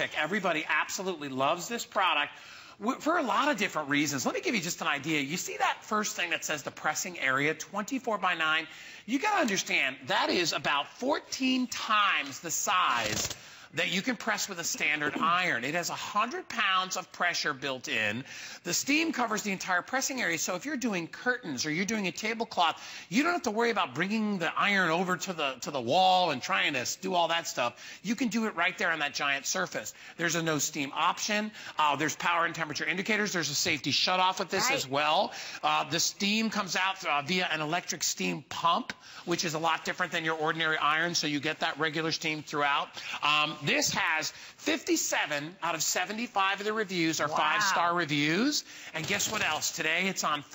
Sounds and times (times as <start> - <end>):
Speech: 0.0 - 50.5.